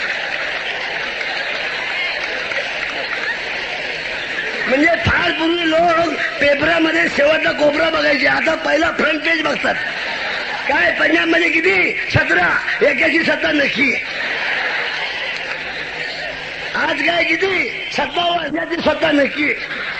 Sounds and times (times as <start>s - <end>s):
Narration, monologue: 4.6s - 14.2s, 16.7s - 19.8s
Male speech, man speaking: 4.7s - 9.8s, 10.7s - 14.0s, 16.8s - 19.7s.